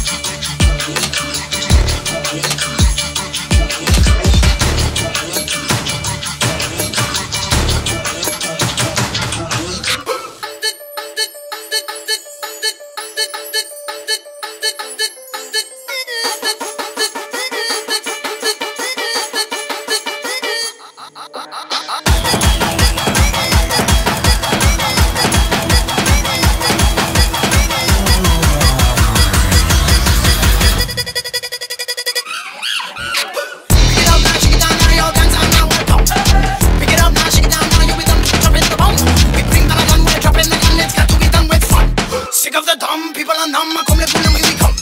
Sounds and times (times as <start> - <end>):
Music: 0.0 - 32.3, 33.1 - 44.8.